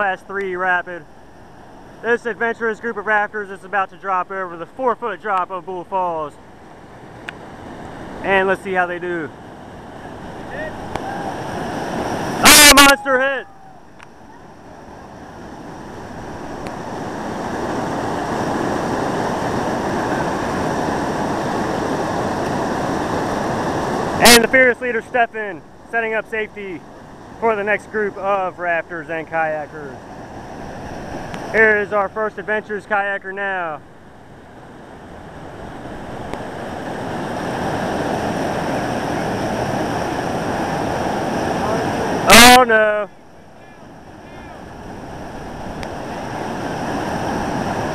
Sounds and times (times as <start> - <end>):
Speech: 0.0 - 1.0, 2.0 - 6.4, 8.2 - 9.3, 12.4 - 13.5, 24.2 - 26.8, 27.4 - 30.0, 31.6 - 33.8, 41.6 - 44.6
Stream: 0.0 - 47.9.